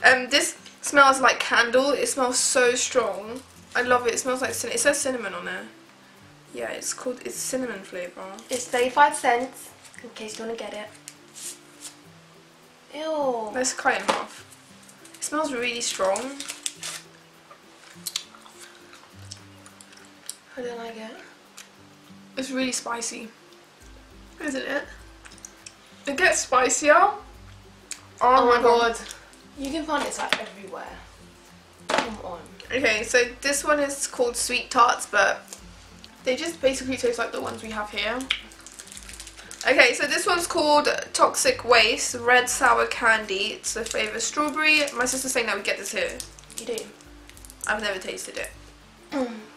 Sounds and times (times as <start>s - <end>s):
Inside, small room: 0.0s - 49.5s
Music: 0.0s - 49.5s.